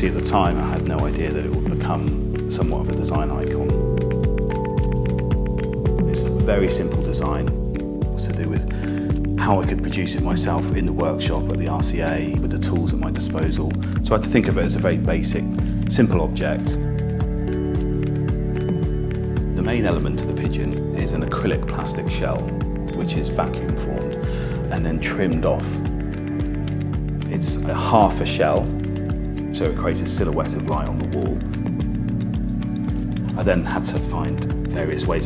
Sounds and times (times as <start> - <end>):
Speech: 0.0 - 3.8, 6.0 - 7.6, 8.2 - 8.7, 9.4 - 16.8, 19.6 - 25.9, 27.2 - 28.8, 29.5 - 31.5, 33.3 - 35.2
Music: 0.0 - 35.2.